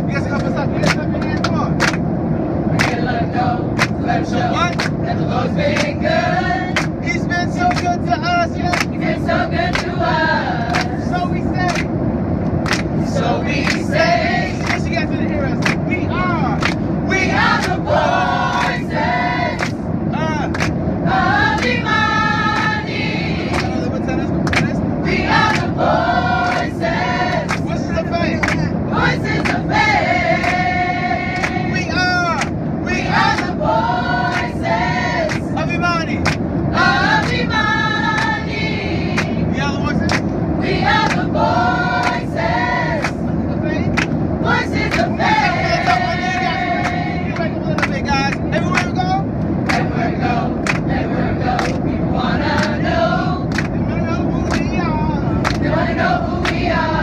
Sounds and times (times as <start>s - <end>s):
Choir: 2.7s - 7.0s, 8.5s - 11.2s, 13.0s - 15.2s, 17.1s - 19.9s, 21.0s - 24.0s, 25.0s - 35.8s, 36.7s - 39.6s, 40.6s - 43.4s, 44.4s - 48.0s, 49.7s - 54.7s, 55.4s - 57.0s.